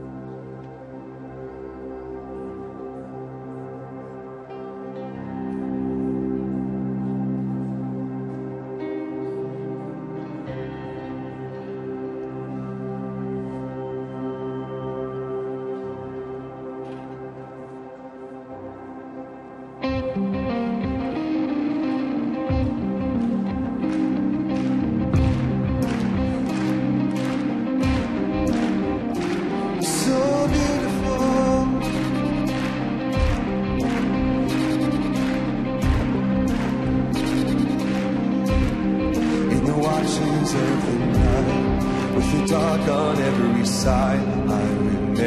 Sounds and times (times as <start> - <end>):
Music: 0.0 - 45.2.